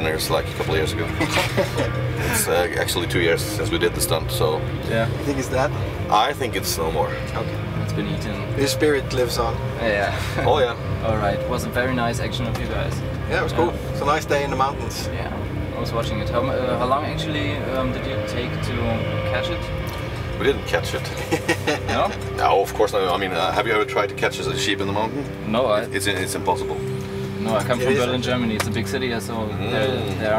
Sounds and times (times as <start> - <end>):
Music: 0.0 - 30.3.